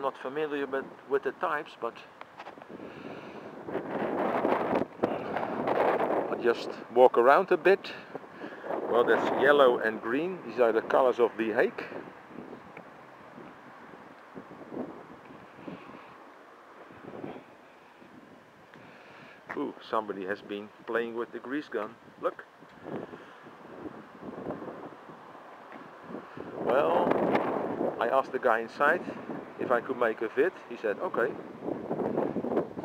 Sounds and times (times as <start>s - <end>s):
Speech: 0.0s - 2.1s, 6.3s - 8.1s, 8.9s - 12.0s, 19.5s - 22.5s, 26.7s - 27.1s, 28.0s - 31.4s.